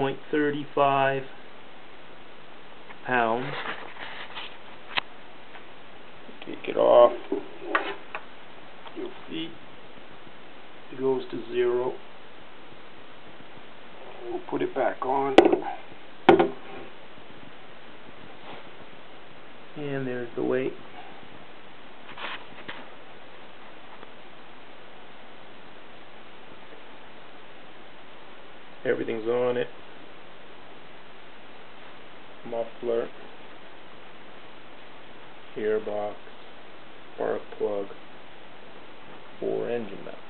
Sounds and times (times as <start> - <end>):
Speech: 0.0 - 1.4, 3.0 - 3.6, 6.3 - 7.3, 9.0 - 9.6, 10.9 - 12.0, 14.1 - 15.8, 19.8 - 20.8, 28.8 - 29.7, 32.4 - 33.2, 35.6 - 36.2, 37.2 - 38.0, 39.4 - 40.3.